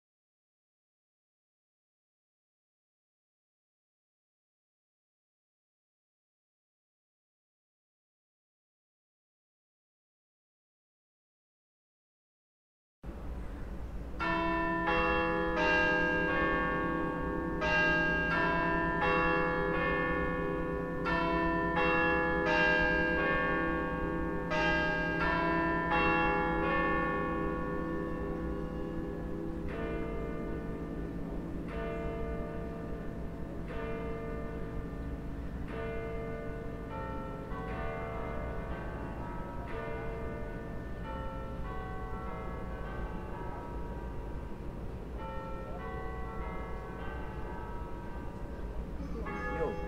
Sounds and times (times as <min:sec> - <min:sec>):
Church bell: 0:13.1 - 0:49.8.